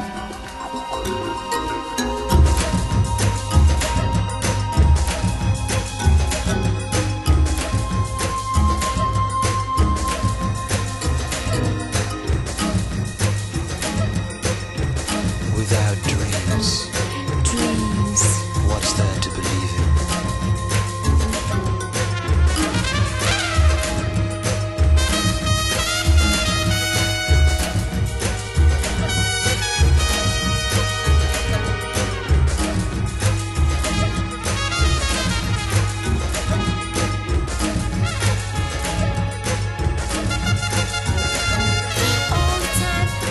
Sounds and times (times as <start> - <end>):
Music: 0.0 - 43.3
Speech: 15.5 - 19.8.